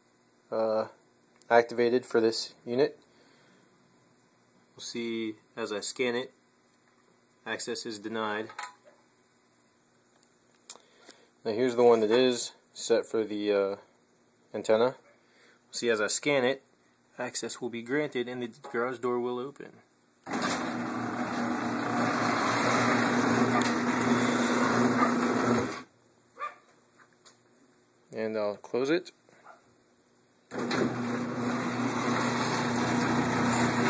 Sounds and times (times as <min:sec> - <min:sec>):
Speech: 0:00.5 - 0:03.0, 0:04.8 - 0:06.4, 0:07.4 - 0:08.6, 0:11.4 - 0:13.9, 0:14.5 - 0:15.0, 0:15.7 - 0:19.9, 0:28.1 - 0:29.2.